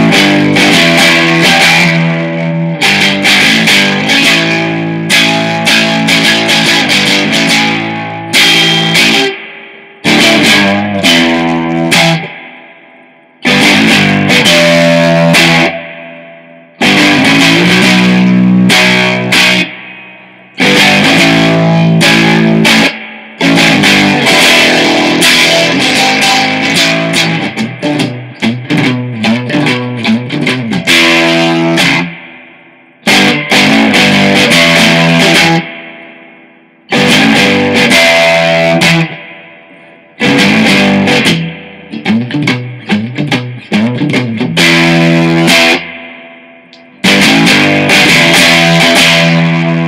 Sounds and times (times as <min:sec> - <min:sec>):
Music: 0:00.0 - 0:49.8.